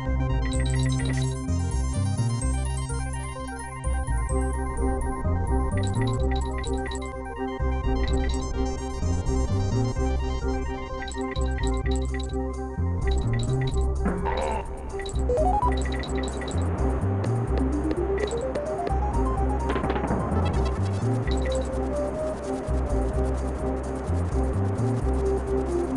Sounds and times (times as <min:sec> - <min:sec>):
Music: 0:00.0 - 0:25.9.